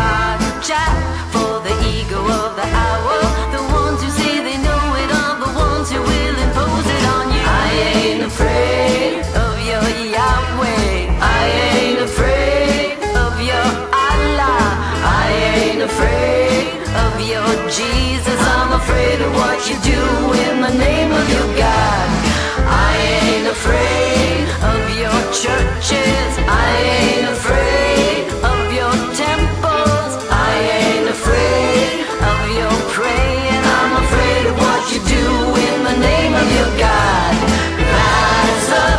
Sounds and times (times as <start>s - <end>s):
Jingle (music): 0.0s - 38.9s.